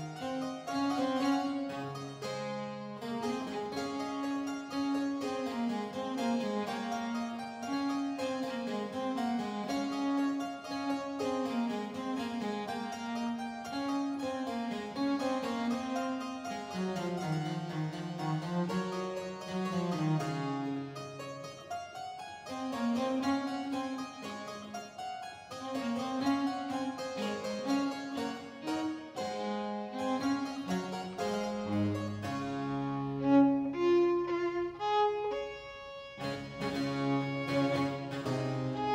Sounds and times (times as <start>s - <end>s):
Harpsichord: 0.0s - 33.7s, 36.1s - 38.9s
Violin, fiddle: 0.0s - 38.9s.